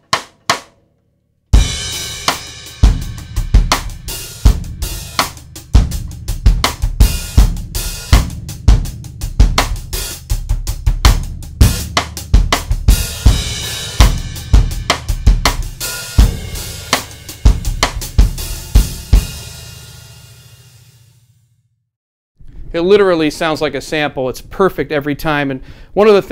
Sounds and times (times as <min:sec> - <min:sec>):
Drum: 0:00.0 - 0:00.7, 0:01.6 - 0:20.8
Drum kit: 0:00.0 - 0:00.8, 0:01.5 - 0:21.1.